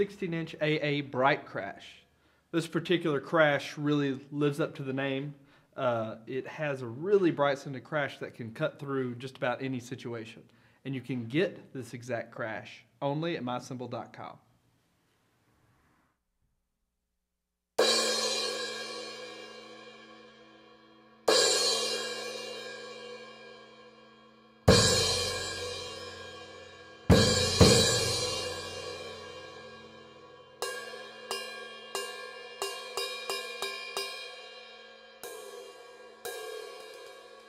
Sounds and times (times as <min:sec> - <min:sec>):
Drum: 0:24.7 - 0:29.8
Drum kit: 0:24.7 - 0:34.4, 0:35.2 - 0:37.4.